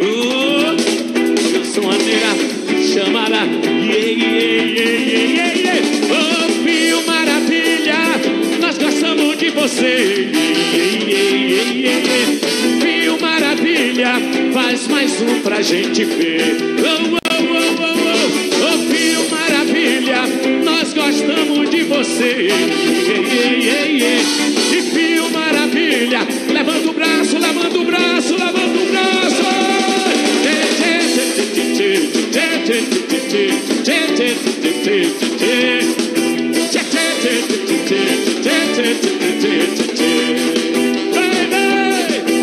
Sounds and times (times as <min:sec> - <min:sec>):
Music: 0:00.0 - 0:42.4.